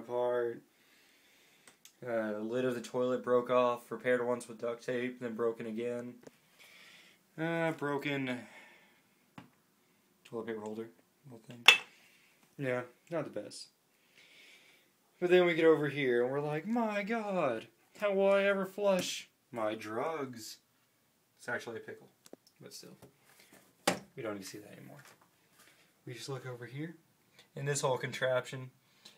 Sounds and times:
Speech: 0.0s - 0.6s, 2.0s - 6.2s, 7.4s - 8.5s, 10.3s - 11.7s, 12.6s - 13.8s, 15.2s - 20.6s, 21.4s - 23.1s, 24.2s - 25.1s, 26.0s - 27.0s, 27.6s - 28.8s.

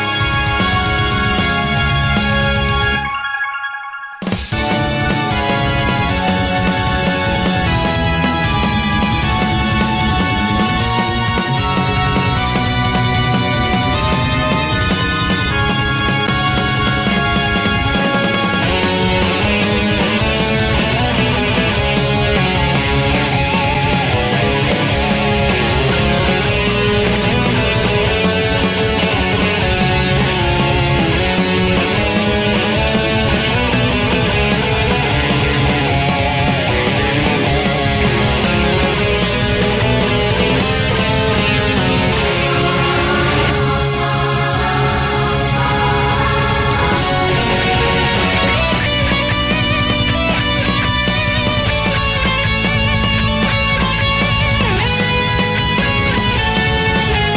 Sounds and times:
Music: 0.0s - 57.3s.

